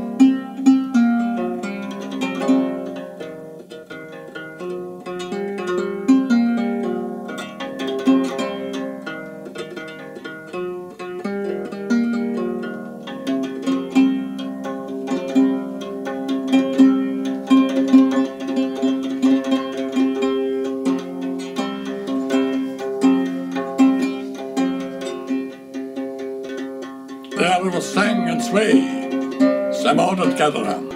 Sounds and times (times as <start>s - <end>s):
Music: 0.0s - 30.9s.